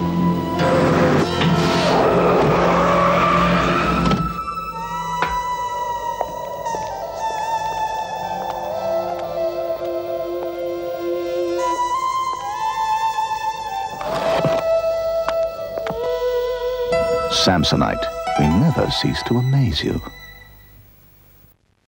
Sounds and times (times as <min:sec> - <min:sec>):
Music: 0:00.0 - 0:20.9
Speech: 0:17.3 - 0:20.1.